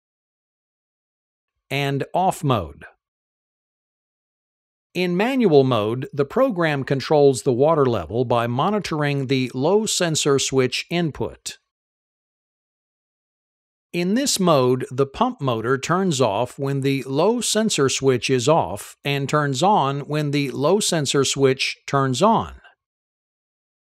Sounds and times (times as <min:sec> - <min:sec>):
Speech: 0:01.7 - 0:03.0, 0:05.0 - 0:11.7, 0:14.0 - 0:22.8.